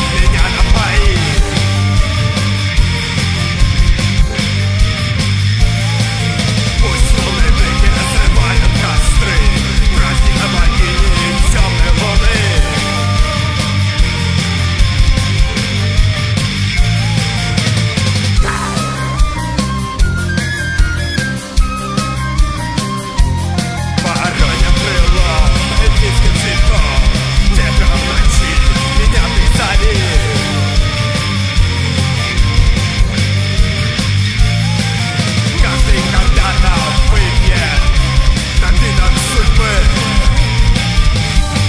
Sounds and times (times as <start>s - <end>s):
Rock music: 0.0s - 41.6s.